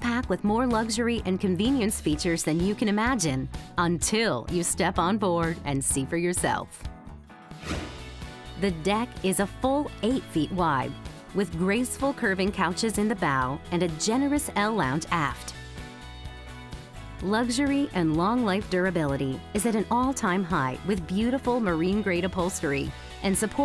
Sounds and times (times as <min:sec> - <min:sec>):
Speech: 0:00.0 - 0:06.8, 0:08.6 - 0:15.6, 0:17.2 - 0:23.6
Music: 0:00.0 - 0:23.6.